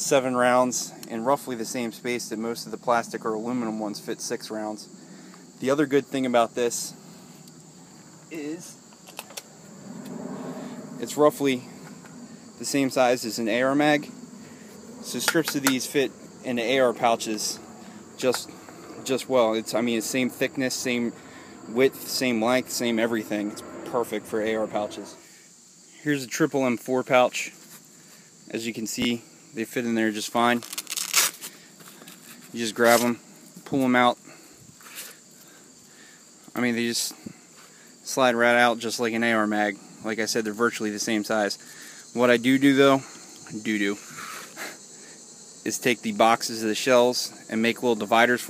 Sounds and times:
Speech: 0.0 - 4.9, 5.6 - 7.0, 8.3 - 8.8, 11.0 - 11.7, 12.6 - 14.1, 15.1 - 17.6, 18.2 - 25.2, 26.0 - 27.6, 28.5 - 30.6, 32.6 - 34.3, 36.6 - 37.3, 38.1 - 41.6, 42.2 - 44.0, 45.7 - 48.5.

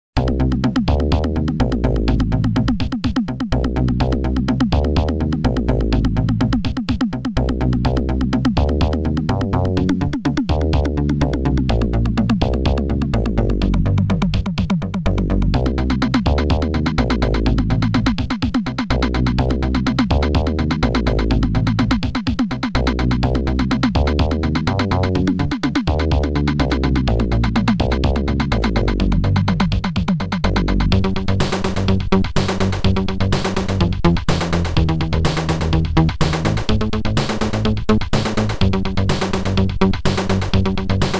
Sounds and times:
Drum machine: 0.2 - 41.1.

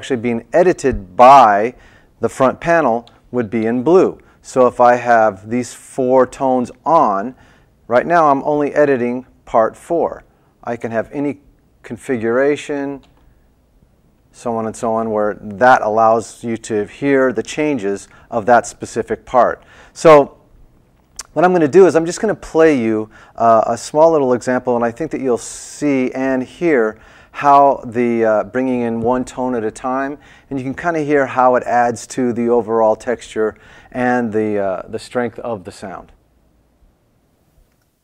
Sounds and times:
Speech: 0.0 - 13.1, 14.3 - 20.4, 21.2 - 36.2.

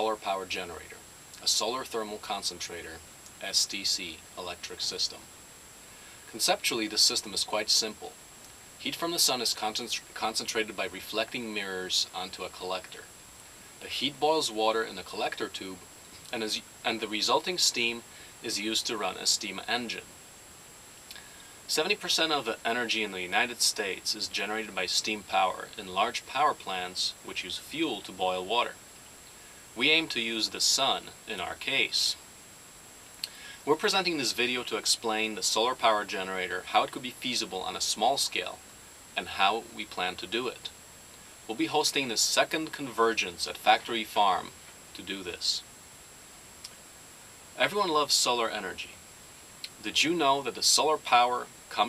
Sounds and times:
Speech: 0.0 - 5.3, 6.3 - 8.2, 8.8 - 13.1, 13.8 - 20.1, 21.2 - 28.8, 29.8 - 32.2, 33.3 - 38.6, 39.2 - 40.7, 41.5 - 45.7, 47.6 - 49.0, 49.7 - 51.8.

